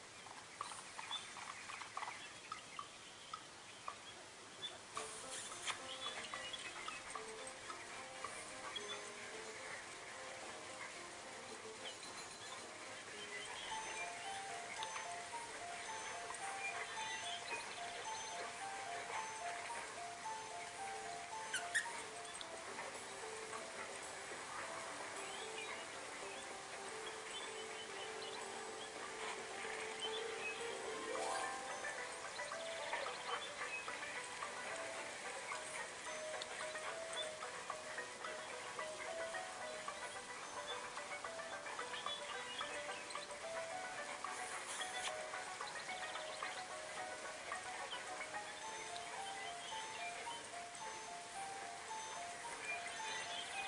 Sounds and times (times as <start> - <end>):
Music: 4.6 - 53.6.